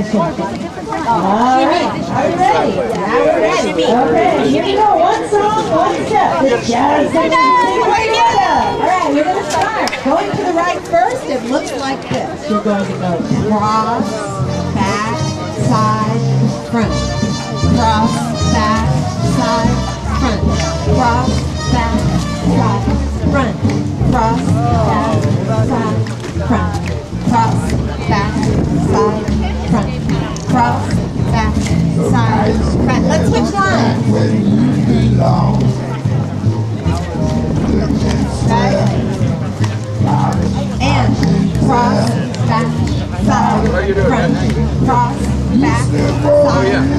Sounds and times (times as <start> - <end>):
Music: 0.0 - 46.9
Speech: 0.0 - 46.9.